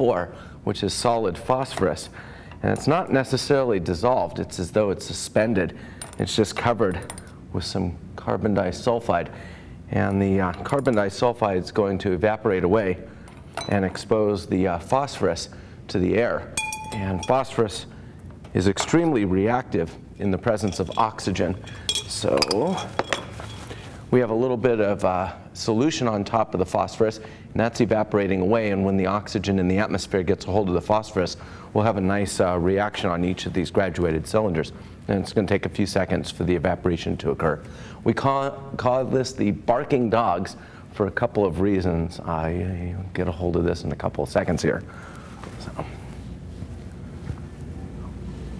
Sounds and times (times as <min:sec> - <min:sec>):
Speech: 0:00.0 - 0:09.3, 0:09.9 - 0:17.9, 0:18.5 - 0:22.9, 0:24.1 - 0:44.9.